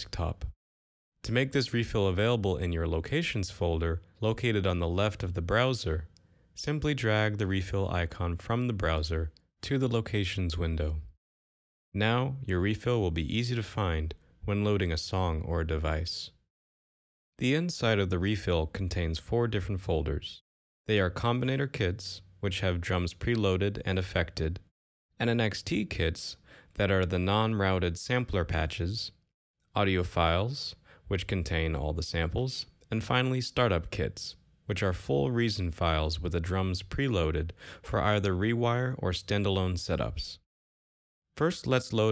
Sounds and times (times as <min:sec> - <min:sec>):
Speech: 0:00.0 - 0:00.6, 0:01.2 - 0:11.2, 0:12.0 - 0:16.4, 0:17.4 - 0:40.4, 0:41.4 - 0:42.1.